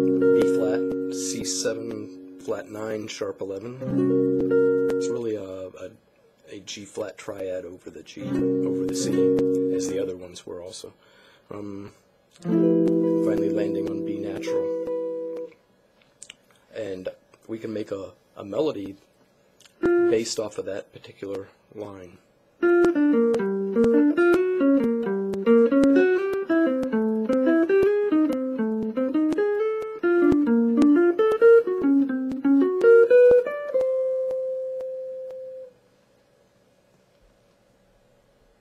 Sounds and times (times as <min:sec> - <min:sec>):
Guitar: 0:00.0 - 0:10.9, 0:11.5 - 0:35.9
Inside, small room: 0:00.0 - 0:38.6.